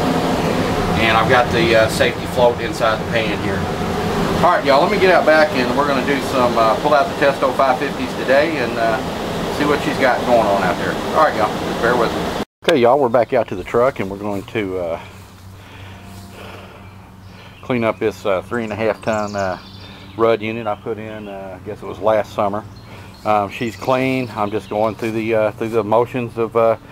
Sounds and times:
Speech: 0:01.0 - 0:03.6, 0:04.4 - 0:15.1, 0:17.6 - 0:22.6, 0:23.2 - 0:26.8.

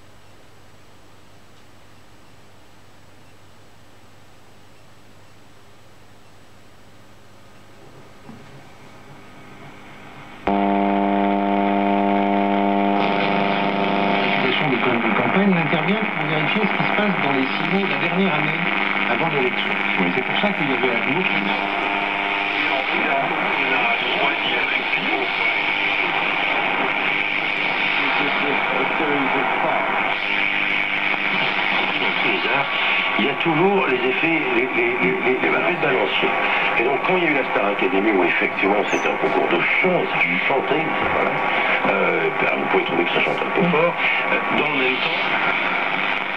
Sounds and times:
Radio: 0:07.9 - 0:46.3
Speech: 0:14.2 - 0:21.8, 0:22.5 - 0:26.3, 0:27.9 - 0:30.1, 0:31.8 - 0:45.5.

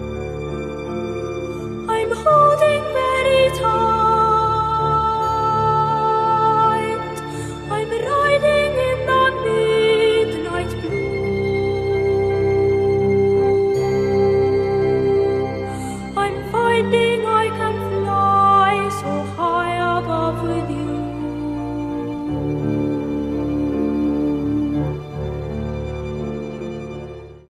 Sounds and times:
Music: 0:00.0 - 0:27.5.

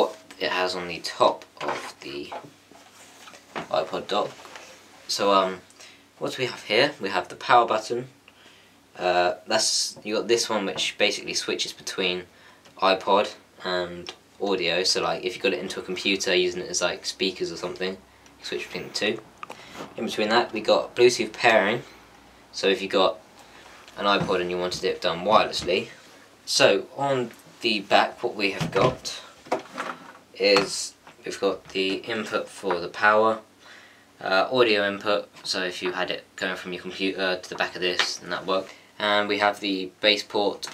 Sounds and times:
Speech: 0:00.0 - 0:02.5, 0:03.7 - 0:04.4, 0:05.1 - 0:08.2, 0:09.0 - 0:19.3, 0:20.0 - 0:21.9, 0:22.5 - 0:23.2, 0:24.0 - 0:29.4, 0:30.3 - 0:33.5, 0:34.2 - 0:40.7.

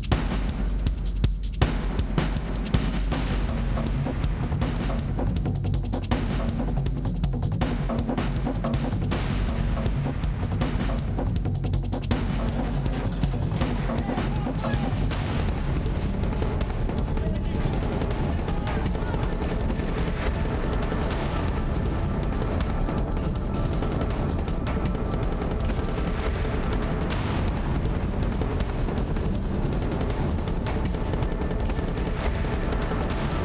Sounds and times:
Music: 0:00.0 - 0:33.4.

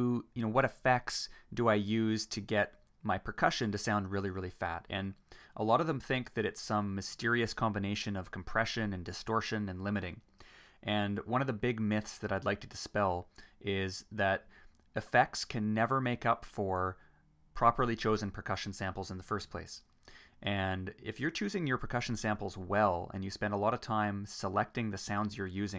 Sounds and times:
Narration, monologue: 0:00.0 - 0:25.7.

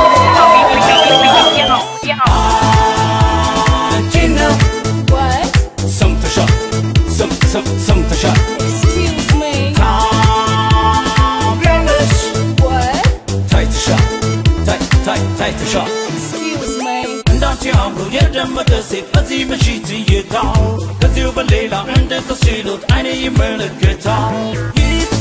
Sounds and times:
Exciting music: 0:00.0 - 0:25.2.

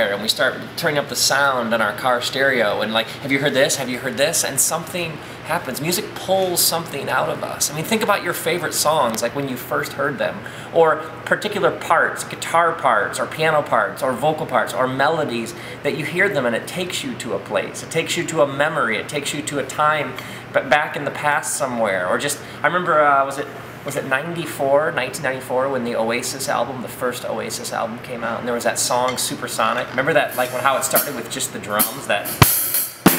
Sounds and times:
Speech: 0:00.0 - 0:32.4.

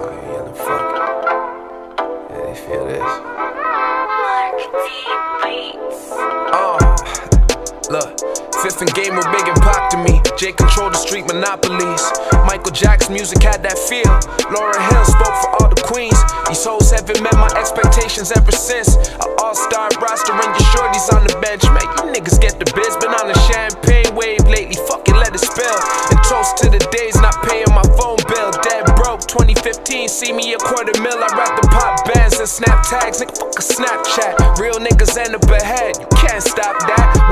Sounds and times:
Music: 0:00.0 - 0:37.3.

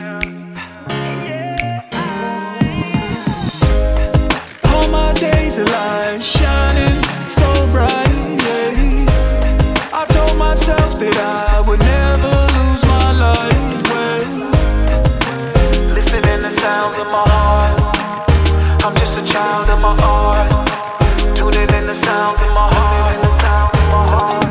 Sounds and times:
Music: 0:00.0 - 0:24.5.

